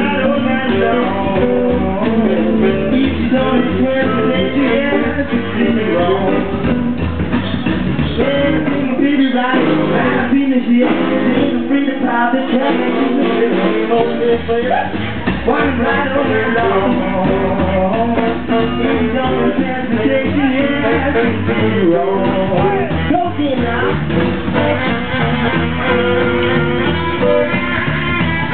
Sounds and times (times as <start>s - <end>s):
Acoustic guitar: 0.0s - 28.5s
Background music: 0.0s - 28.5s
Bass guitar: 0.0s - 28.5s
Rock and roll: 0.0s - 28.5s.